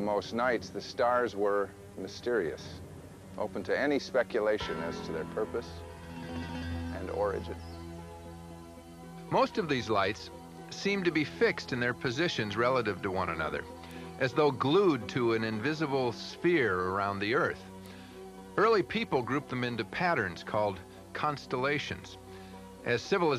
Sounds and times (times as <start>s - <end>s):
Speech: 0.0s - 2.8s, 3.4s - 5.8s, 6.9s - 7.6s, 9.3s - 17.6s, 18.6s - 22.2s, 22.8s - 23.3s
Music: 0.0s - 23.3s.